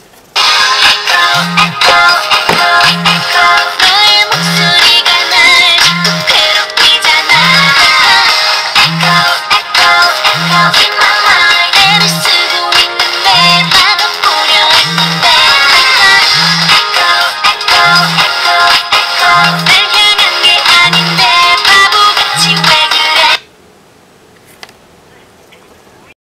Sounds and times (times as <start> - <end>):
Music: 0.4 - 23.4
Ringtone: 0.4 - 23.4.